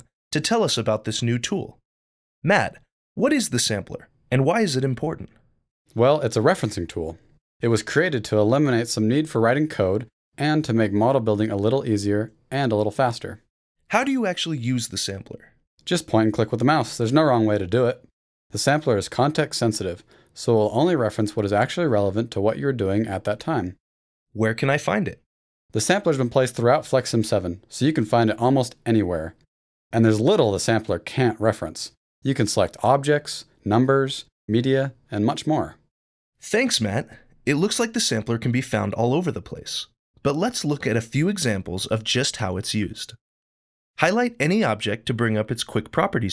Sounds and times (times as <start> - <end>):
Speech: 0.0 - 1.8, 2.4 - 5.3, 5.9 - 23.8, 24.4 - 29.4, 30.0 - 43.2, 44.0 - 46.3.